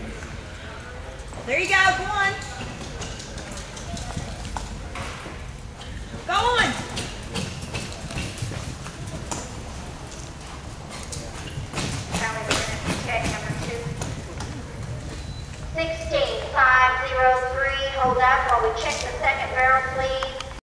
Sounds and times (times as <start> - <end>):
Clip-clop: 1.2 - 16.5
Speech: 15.8 - 20.4.